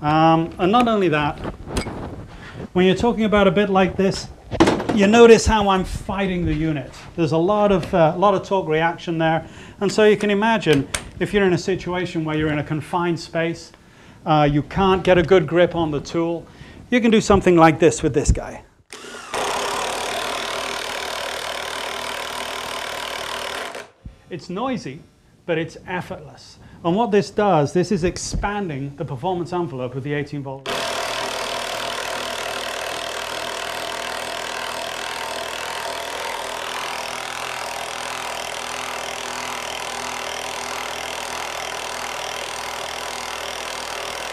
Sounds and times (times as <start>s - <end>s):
Drill: 18.9s - 24.0s, 30.7s - 44.3s.